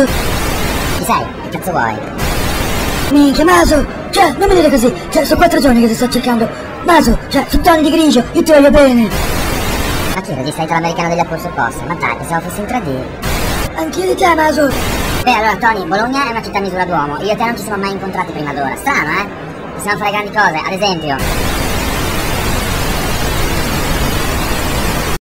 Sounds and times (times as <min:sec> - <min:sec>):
Speech: 0:01.0 - 0:02.1, 0:03.1 - 0:09.2, 0:10.2 - 0:21.2.